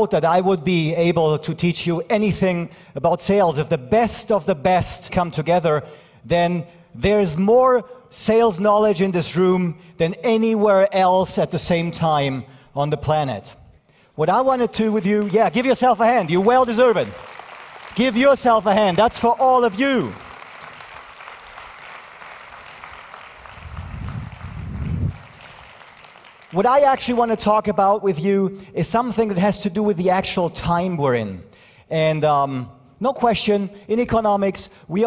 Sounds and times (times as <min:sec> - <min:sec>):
Male speech, man speaking: 0:00.0 - 0:13.6, 0:14.2 - 0:17.2, 0:18.0 - 0:20.2, 0:26.6 - 0:35.0.